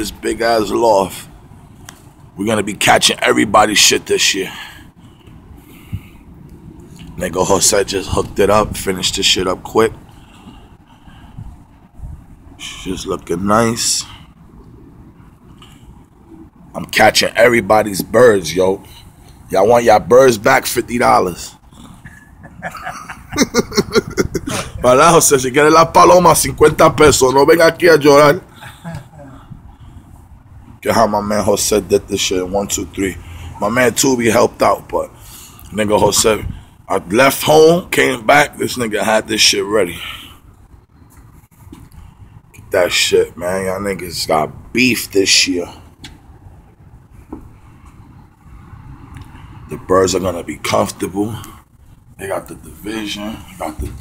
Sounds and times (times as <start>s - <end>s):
Speech: 0.0s - 1.3s, 2.4s - 4.6s, 7.2s - 10.0s, 16.8s - 18.9s, 19.5s - 21.6s, 24.8s - 28.4s, 30.8s - 35.1s, 35.7s - 40.0s, 42.7s - 45.8s, 49.7s - 51.5s, 52.2s - 54.0s.